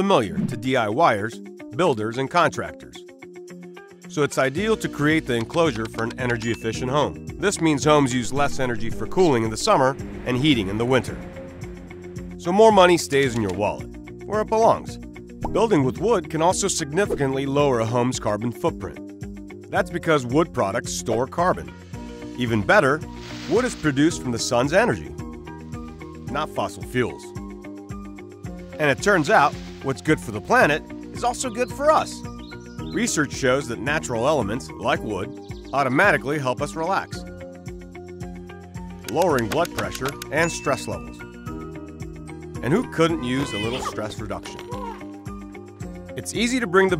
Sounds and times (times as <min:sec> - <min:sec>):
Speech: 0:00.0 - 0:03.0, 0:04.1 - 0:11.2, 0:12.4 - 0:19.0, 0:19.7 - 0:21.7, 0:22.4 - 0:25.1, 0:26.3 - 0:27.3, 0:28.8 - 0:32.2, 0:32.9 - 0:37.2, 0:39.1 - 0:41.2, 0:42.6 - 0:45.0, 0:46.2 - 0:46.9
Music: 0:00.0 - 0:46.9.